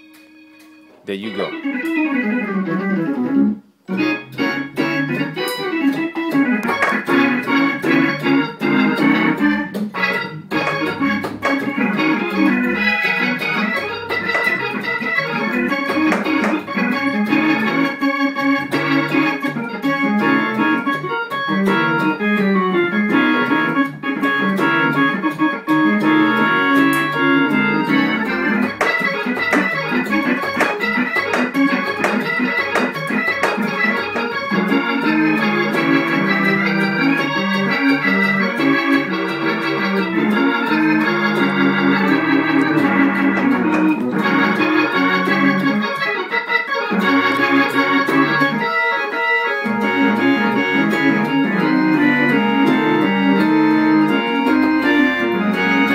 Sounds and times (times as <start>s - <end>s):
Hammond organ: 0.0s - 55.9s.